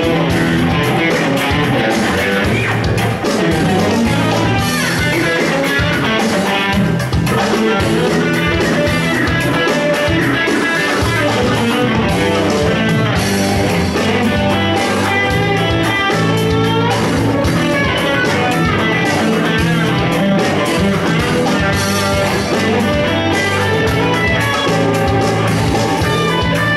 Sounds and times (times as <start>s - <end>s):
Guitar: 0.0s - 26.7s.